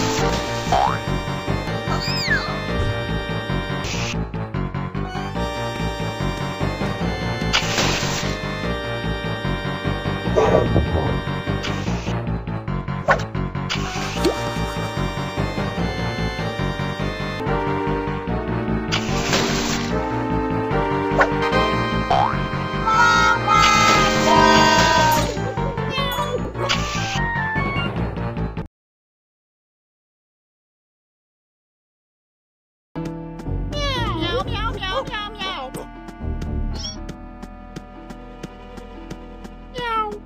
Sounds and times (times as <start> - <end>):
Music: 0.0 - 28.7, 33.0 - 40.2.